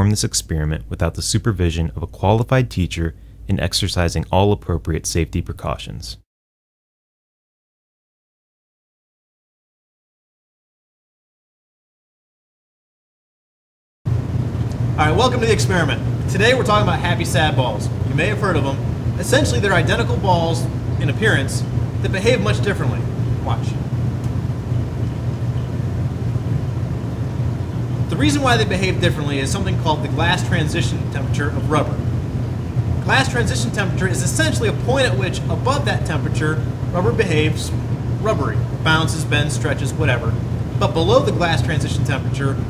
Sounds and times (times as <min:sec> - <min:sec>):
Speech: 0:00.0 - 0:06.2, 0:15.0 - 0:23.8, 0:28.1 - 0:32.1, 0:33.1 - 0:42.7.